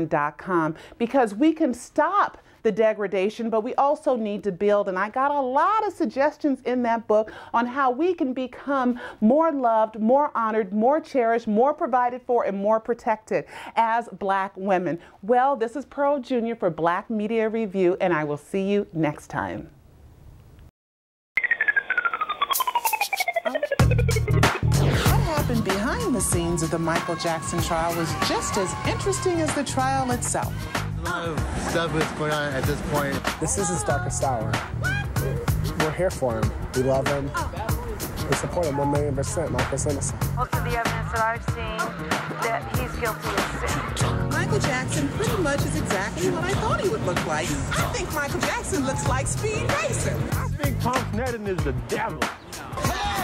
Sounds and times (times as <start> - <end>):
Female speech, woman speaking: 0.0 - 19.7, 25.1 - 30.5, 40.4 - 50.3
Music: 22.6 - 53.2.